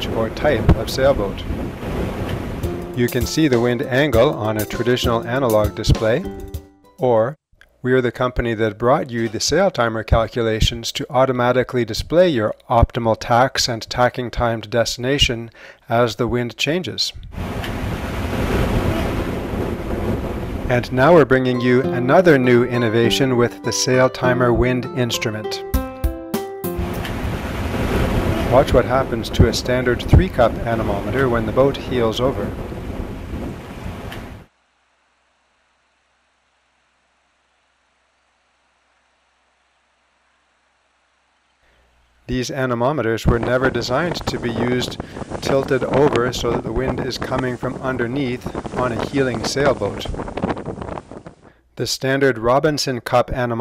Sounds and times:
Boat, Water vehicle: 0.0s - 2.6s, 17.4s - 20.8s, 27.0s - 34.4s, 43.3s - 51.4s
Waves, surf: 0.0s - 5.2s, 17.3s - 21.2s, 26.8s - 34.5s, 43.3s - 51.4s.

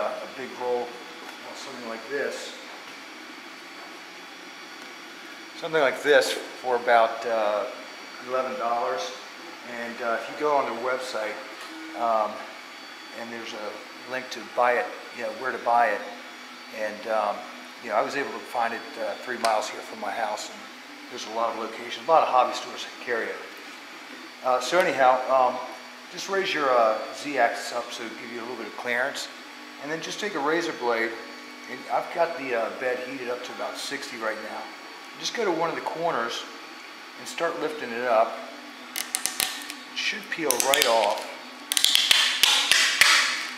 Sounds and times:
Speech: 0.0s - 2.6s, 5.6s - 12.4s, 13.2s - 23.6s, 24.4s - 36.5s, 37.2s - 38.5s, 40.0s - 41.4s.

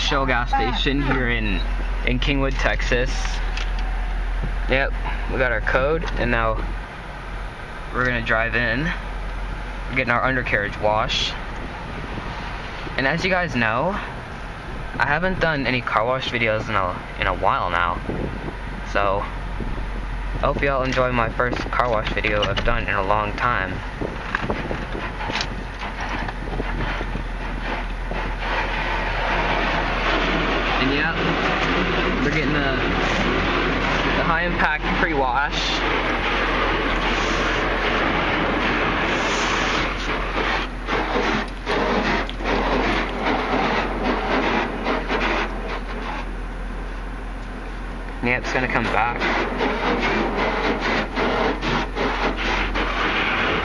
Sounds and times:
Speech: 0.0s - 3.4s, 4.7s - 6.7s, 7.9s - 9.0s, 9.9s - 11.4s, 13.0s - 14.1s, 15.0s - 18.1s, 18.9s - 19.4s, 20.4s - 23.8s, 30.8s - 31.3s, 32.2s - 33.0s, 34.1s - 35.8s, 48.2s - 49.3s
Vehicle: 0.0s - 53.6s.

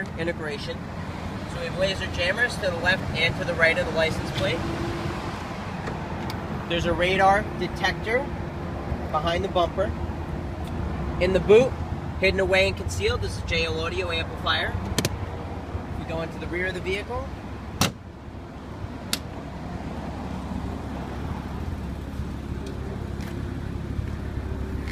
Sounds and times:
Speech: 0.0s - 0.8s, 1.5s - 4.6s, 6.7s - 8.3s, 9.1s - 10.0s, 11.2s - 14.8s, 16.0s - 17.3s.

